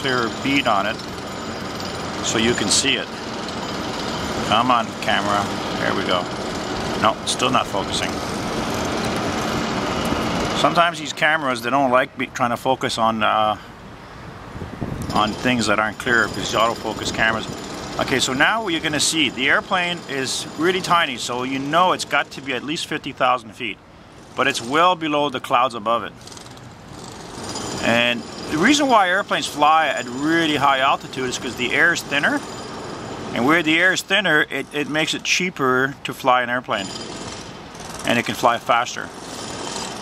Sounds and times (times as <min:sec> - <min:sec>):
Wind: 0:00.0 - 0:40.0.